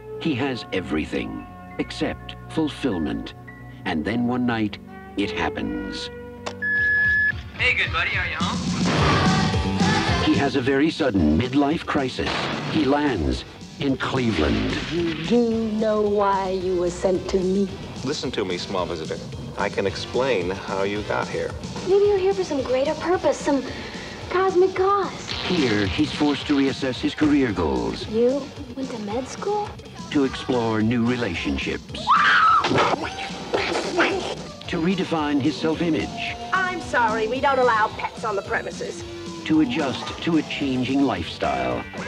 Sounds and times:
Music: 0.0s - 42.0s.

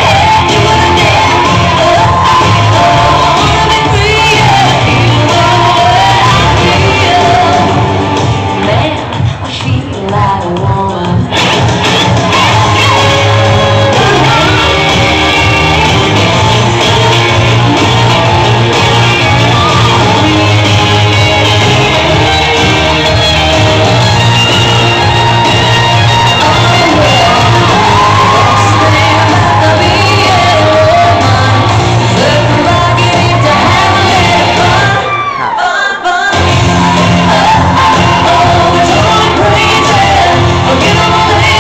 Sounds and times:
Shout: 0.0s - 4.8s, 19.2s - 20.3s, 26.1s - 31.3s, 32.8s - 41.6s
Music: 0.0s - 41.6s.

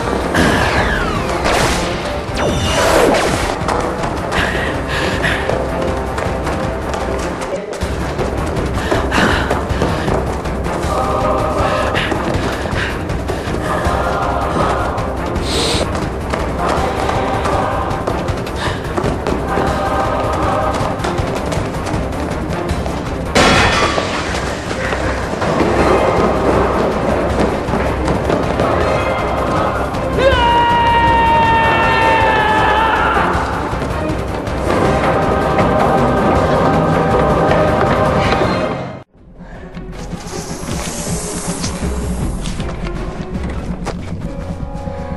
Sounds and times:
Music: 0.0s - 45.1s.

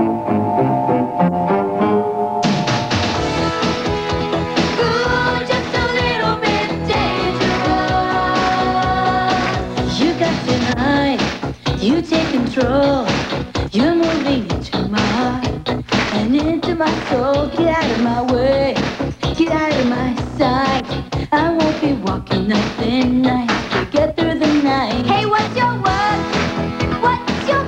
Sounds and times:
Music: 0.0s - 27.6s.

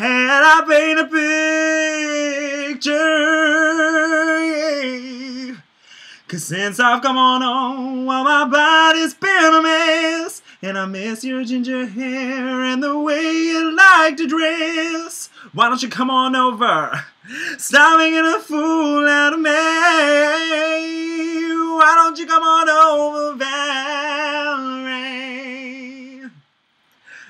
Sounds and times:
Male singing: 0.0s - 5.6s, 6.2s - 26.4s.

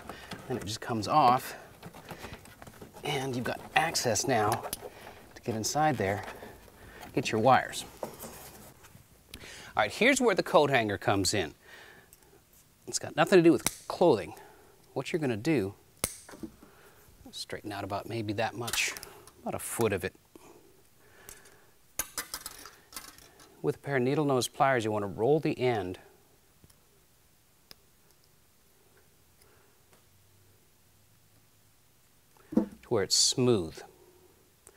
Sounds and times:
Speech: 0.5s - 1.7s, 3.0s - 4.7s, 5.4s - 6.4s, 7.2s - 7.9s, 9.8s - 11.6s, 12.9s - 14.4s, 15.0s - 15.8s, 17.3s - 20.2s, 23.6s - 26.1s, 32.9s - 33.9s.

